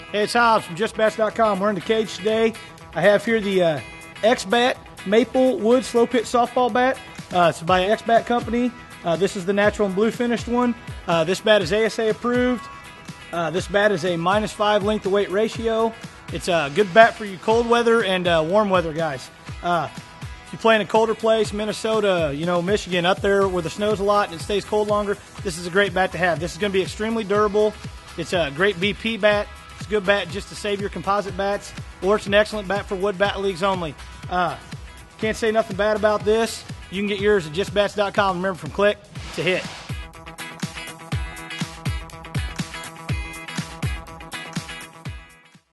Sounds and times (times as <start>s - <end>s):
Music: 0.0s - 45.7s
Speech: 0.1s - 12.7s, 13.3s - 39.8s.